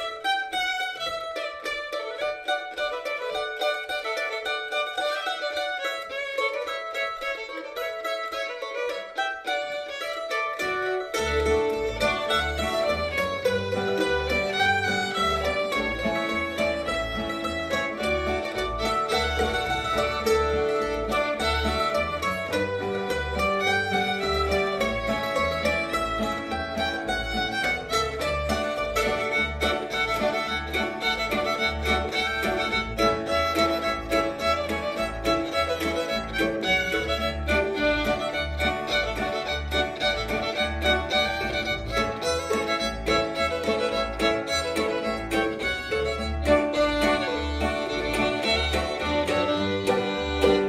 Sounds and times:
Banjo: 0.0s - 50.6s
Cello: 0.0s - 50.6s
Guitar: 0.0s - 50.6s
Violin, fiddle: 0.0s - 50.6s.

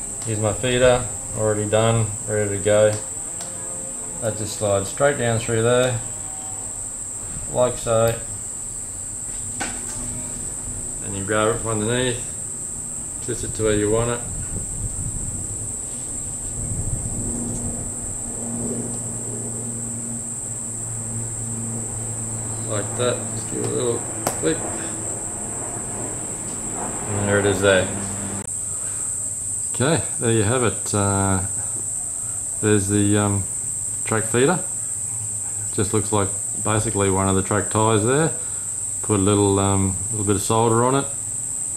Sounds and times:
Speech: 0.2s - 3.1s, 4.2s - 6.1s, 7.5s - 8.3s, 11.0s - 12.4s, 13.2s - 14.3s, 22.6s - 25.0s, 27.1s - 28.0s, 29.7s - 31.6s, 32.6s - 34.7s, 35.7s - 38.4s, 39.0s - 41.2s.

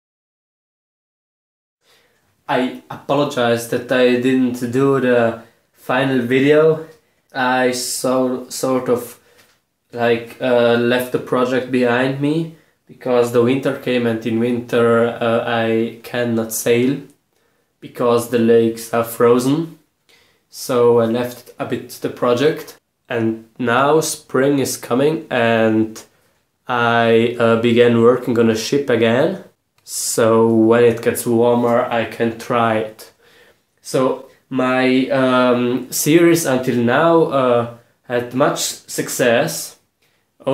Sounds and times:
Speech: 2.5s - 9.2s, 9.9s - 17.2s, 17.8s - 19.9s, 20.5s - 33.2s, 33.8s - 40.5s.

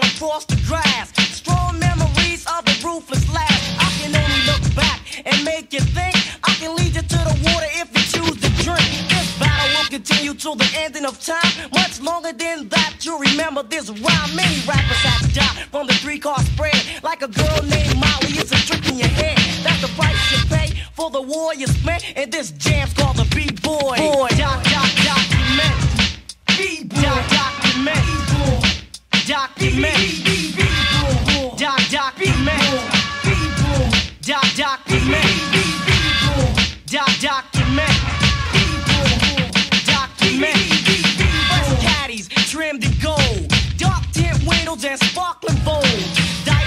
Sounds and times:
Scratching (performance technique): 0.0s - 46.6s.

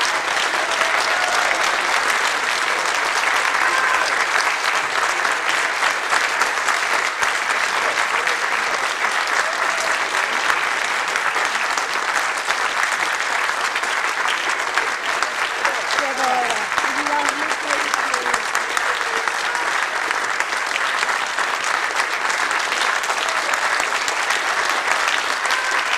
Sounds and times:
Applause: 0.0s - 25.9s.

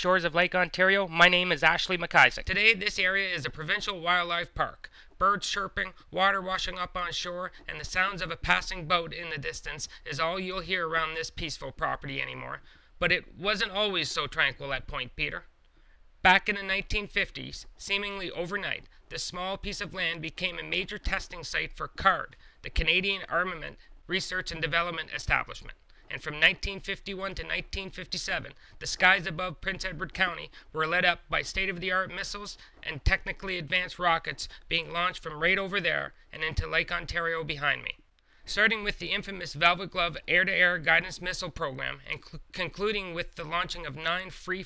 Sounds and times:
Speech: 0.0s - 15.5s, 16.2s - 44.6s.

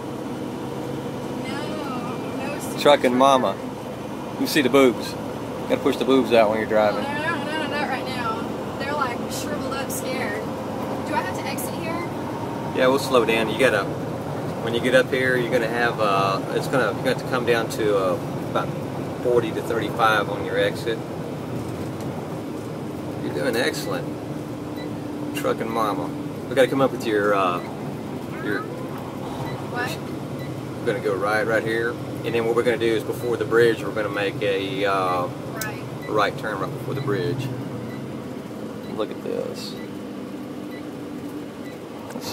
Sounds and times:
Vehicle: 0.0s - 42.3s
Speech: 1.4s - 3.6s, 4.4s - 10.4s, 23.2s - 24.1s, 30.9s - 37.4s.

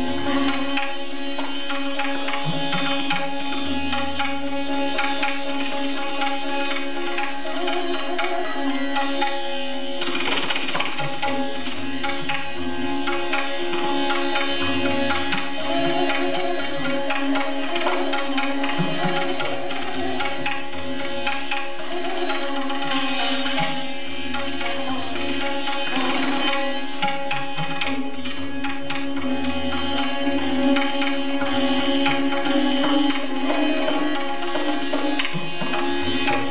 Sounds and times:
Sitar: 0.0s - 36.5s
Tabla: 0.0s - 36.5s.

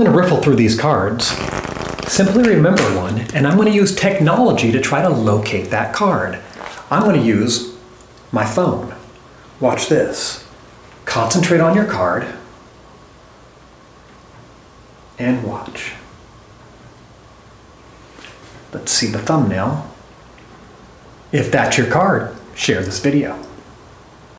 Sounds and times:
Speech: 0.0s - 1.4s, 2.1s - 12.5s, 15.2s - 16.1s, 18.7s - 20.0s, 21.3s - 23.6s.

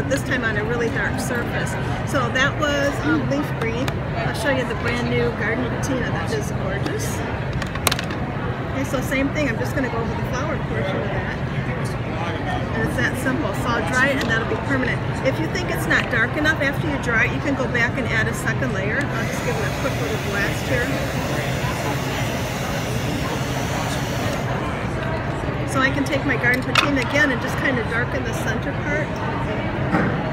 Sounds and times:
Speech: 8.8s - 29.8s.

